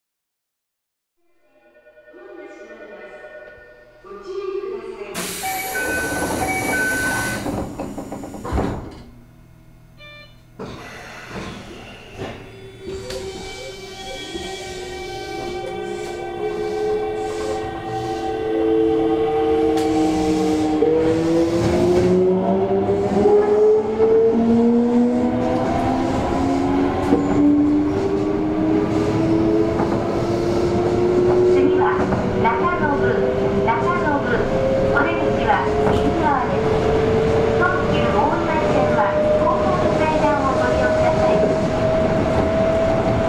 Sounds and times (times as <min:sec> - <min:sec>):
Speech: 0:04.1 - 0:05.3, 0:31.6 - 0:36.7, 0:37.6 - 0:41.6.